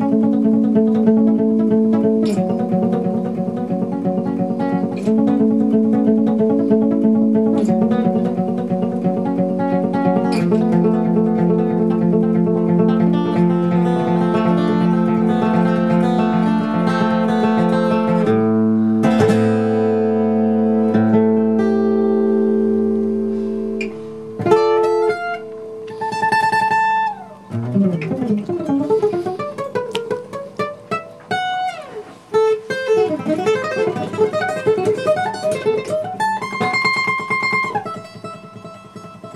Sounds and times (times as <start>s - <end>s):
Acoustic guitar: 0.0s - 39.3s.